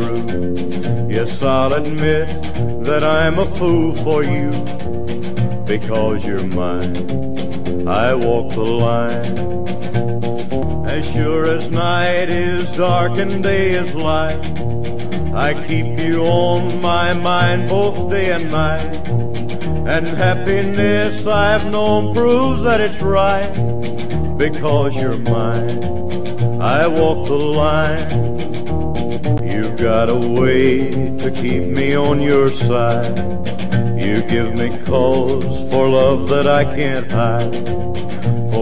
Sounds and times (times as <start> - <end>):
Music: 0.0 - 38.6.